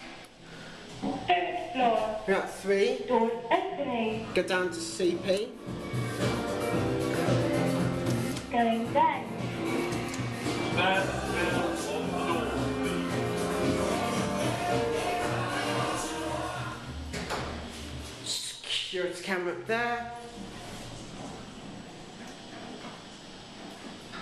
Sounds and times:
Music: 4.4s - 18.3s.

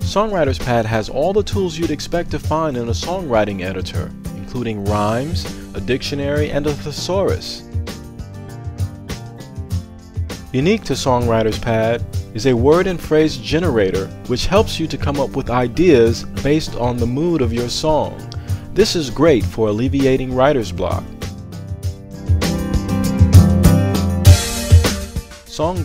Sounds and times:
Speech: 0.0s - 7.6s, 10.5s - 21.1s, 25.5s - 25.8s
Music: 0.0s - 25.8s.

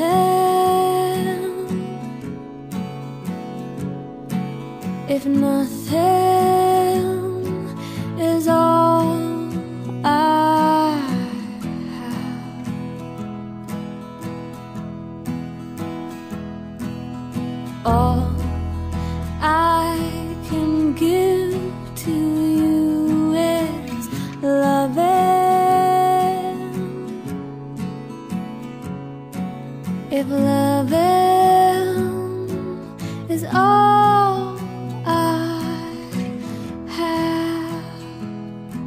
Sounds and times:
Lullaby: 5.1s - 12.8s, 17.9s - 27.5s, 30.1s - 38.8s.

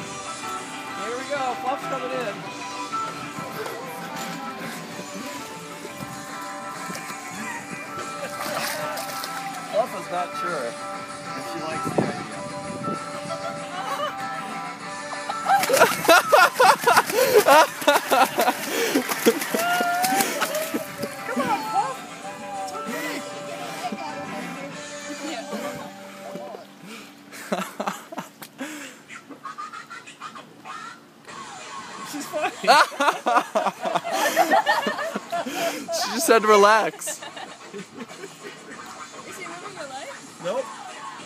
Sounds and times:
Music: 0.0s - 27.6s, 31.1s - 41.2s.

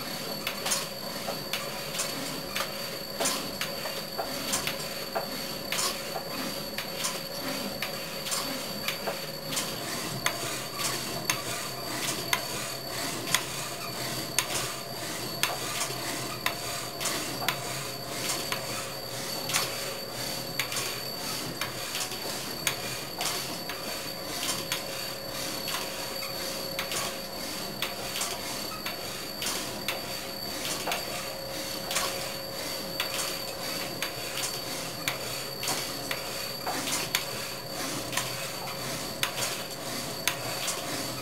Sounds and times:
Filing (rasp): 4.2s - 8.8s, 9.5s - 41.2s.

